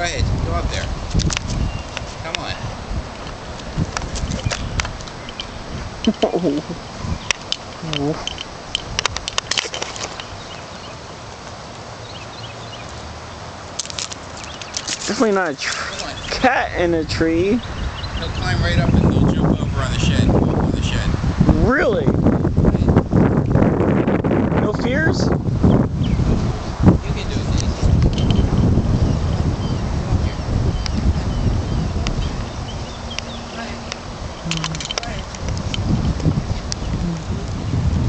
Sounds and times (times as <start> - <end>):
Speech: 6.1 - 6.8, 18.2 - 22.1, 27.0 - 27.9.